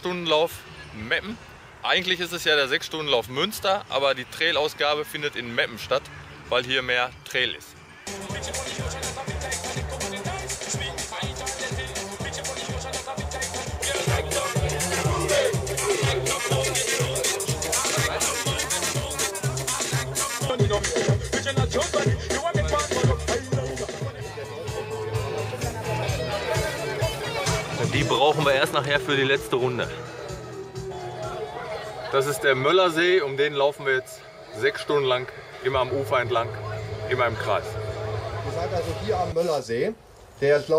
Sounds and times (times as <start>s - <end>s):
Speech: 0.0s - 7.7s, 25.6s - 30.0s, 31.6s - 37.8s, 38.4s - 40.7s
Outside, rural or natural: 0.0s - 21.2s, 31.3s - 40.7s
Music: 5.7s - 39.5s.